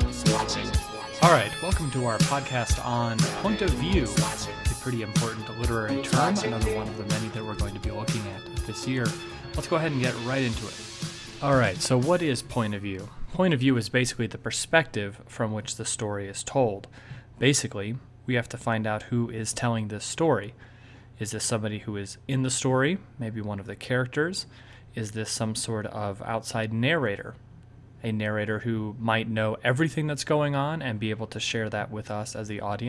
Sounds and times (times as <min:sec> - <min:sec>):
Narration, monologue: 0:00.0 - 0:32.8.